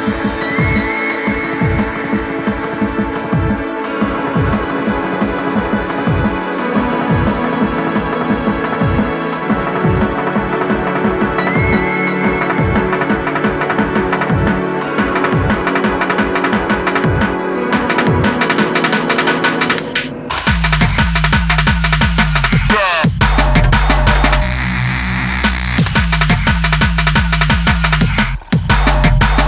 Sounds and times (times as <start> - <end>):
Music: 0.0 - 29.4.